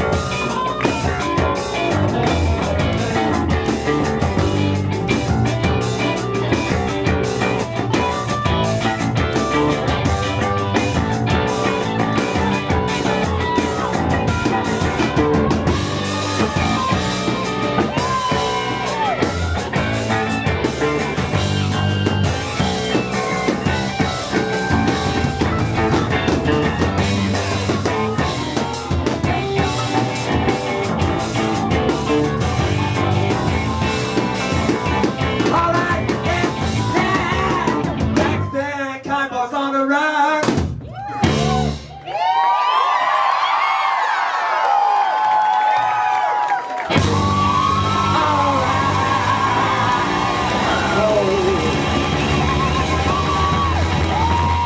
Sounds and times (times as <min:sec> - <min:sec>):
Drum kit: 0:00.0 - 0:38.6, 0:40.4 - 0:42.0, 0:46.8 - 0:54.6
Crowd: 0:00.0 - 0:54.6
Singing: 0:34.7 - 0:40.6, 0:47.8 - 0:53.7.